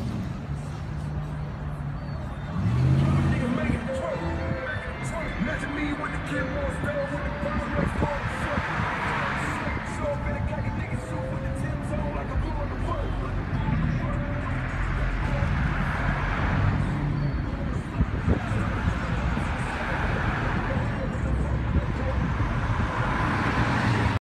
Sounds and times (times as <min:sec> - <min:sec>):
Car: 0:00.0 - 0:24.2
Speech: 0:03.0 - 0:15.6, 0:17.4 - 0:22.3.